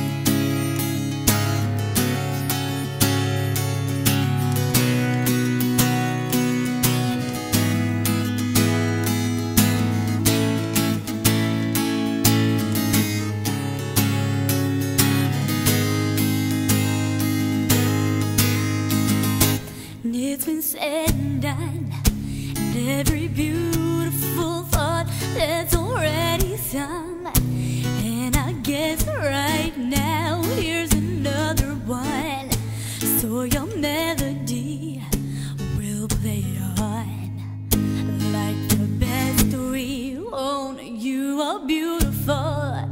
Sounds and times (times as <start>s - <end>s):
Music: 0.0s - 40.8s, 41.4s - 42.9s.